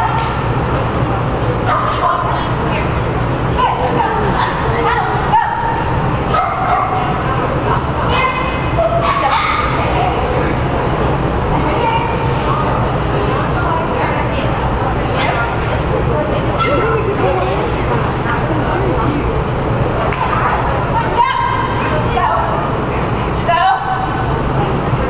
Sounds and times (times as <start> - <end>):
Speech: 0.0 - 25.1.